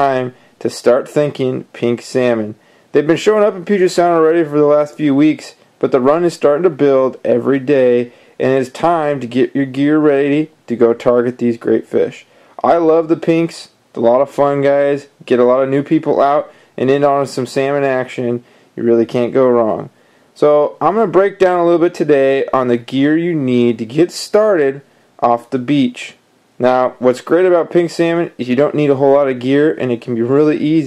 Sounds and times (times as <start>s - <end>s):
Speech: 0.0s - 30.8s.